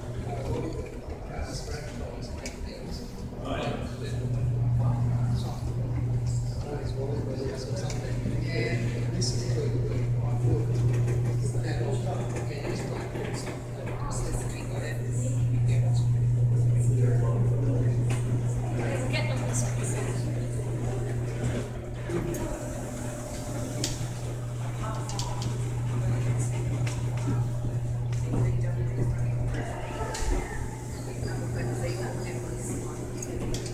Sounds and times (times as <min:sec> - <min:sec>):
Speech: 0:00.1 - 0:22.7, 0:24.5 - 0:33.7.